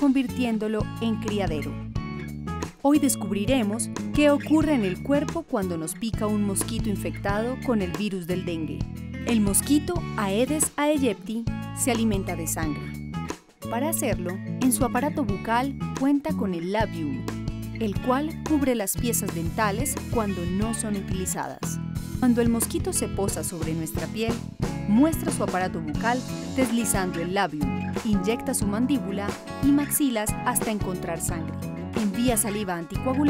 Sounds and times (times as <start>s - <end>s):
Speech: 0.0s - 1.8s, 2.8s - 12.9s, 13.7s - 17.2s, 17.8s - 33.3s
Music: 0.0s - 33.3s.